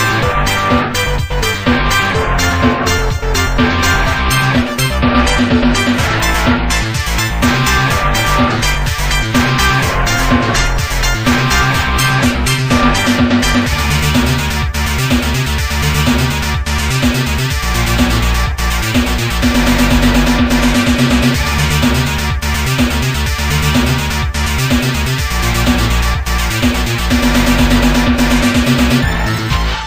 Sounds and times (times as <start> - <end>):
Video game music: 0.0 - 29.8.